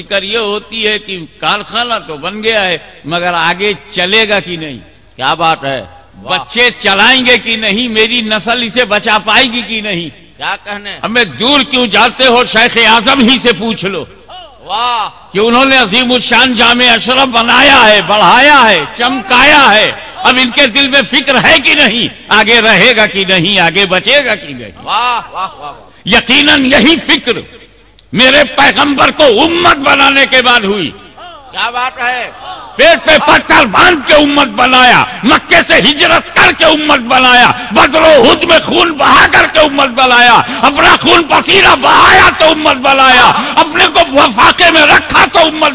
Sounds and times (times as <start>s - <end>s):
Male speech, man speaking: 0.0s - 27.5s, 28.1s - 45.7s
Narration, monologue: 0.0s - 45.7s.